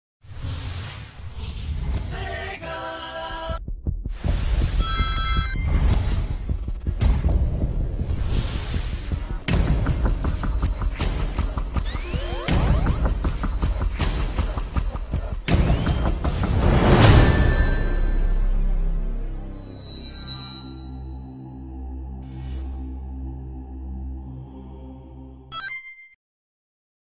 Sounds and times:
Music: 0:05.0 - 0:25.8.

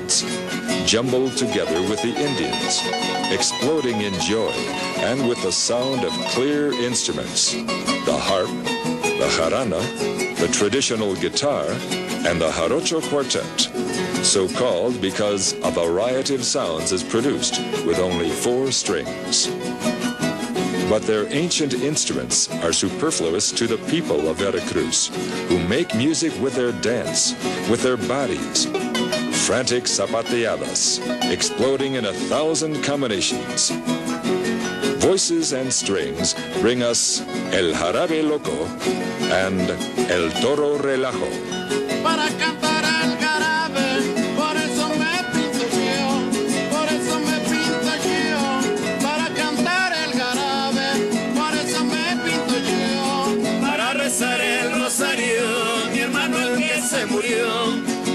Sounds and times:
Speech: 0:00.0 - 0:08.6, 0:09.2 - 0:19.6, 0:20.8 - 0:28.7, 0:29.3 - 0:33.8, 0:35.0 - 0:41.4
Music: 0:00.0 - 0:58.1.

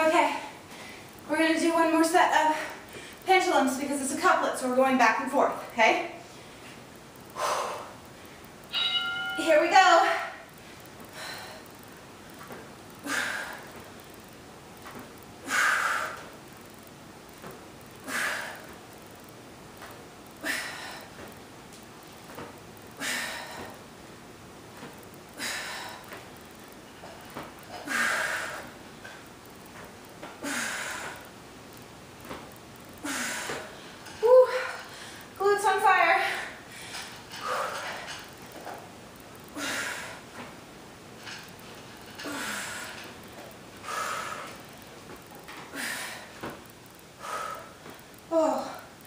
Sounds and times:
Speech: 0:00.0 - 0:00.5, 0:01.3 - 0:02.7, 0:03.3 - 0:06.2, 0:09.4 - 0:10.2, 0:35.4 - 0:36.4.

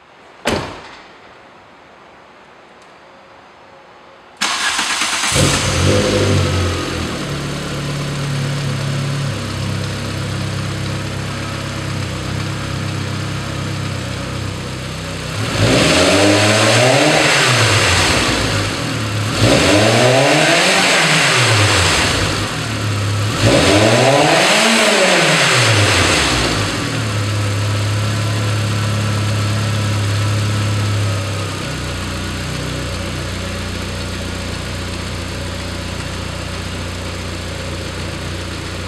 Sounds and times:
Car: 0:04.4 - 0:38.8
Medium engine (mid frequency): 0:04.4 - 0:38.8
Accelerating, revving, vroom: 0:05.3 - 0:07.1, 0:15.4 - 0:18.7, 0:19.3 - 0:22.6, 0:23.2 - 0:26.9
Idling: 0:06.7 - 0:15.3, 0:26.9 - 0:38.8.

